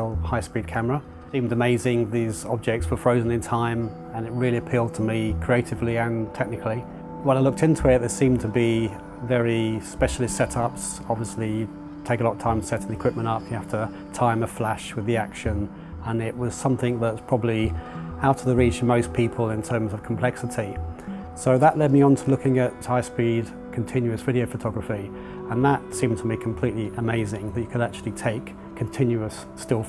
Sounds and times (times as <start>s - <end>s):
Speech: 0.0s - 20.8s, 21.4s - 29.8s
Music: 0.0s - 29.8s.